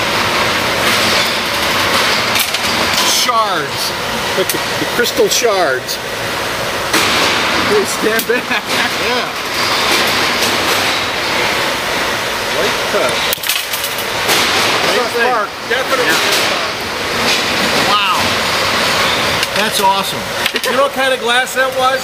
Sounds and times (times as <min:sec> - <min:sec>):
Inside, large room or hall: 0:00.0 - 0:22.0.